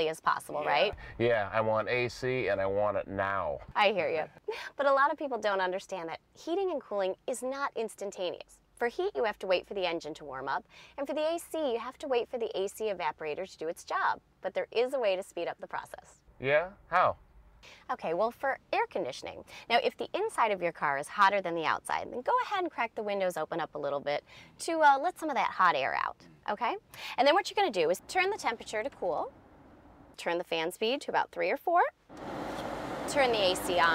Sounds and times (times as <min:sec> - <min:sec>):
Speech: 0:00.0 - 0:04.2, 0:04.8 - 0:17.2, 0:17.9 - 0:29.3.